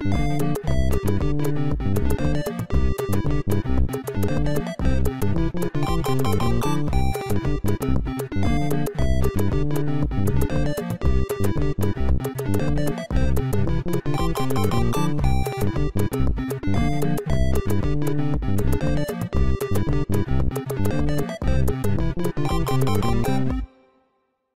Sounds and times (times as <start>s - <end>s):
Theme music: 0.0s - 23.8s.